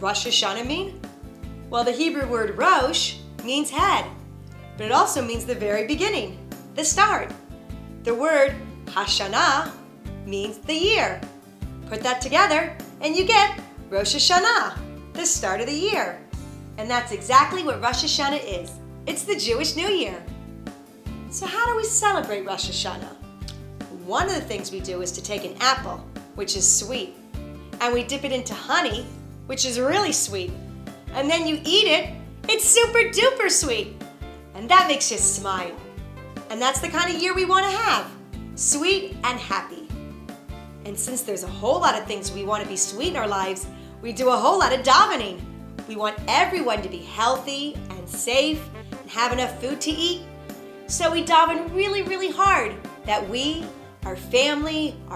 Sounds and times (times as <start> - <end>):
Speech: 0.0 - 1.0, 1.7 - 4.2, 4.8 - 7.4, 8.1 - 11.2, 11.9 - 16.2, 16.8 - 20.3, 21.3 - 23.2, 23.9 - 27.2, 27.8 - 30.6, 31.2 - 34.0, 34.6 - 35.8, 36.5 - 40.0, 40.8 - 50.2, 50.9 - 55.1
Music: 0.0 - 55.1.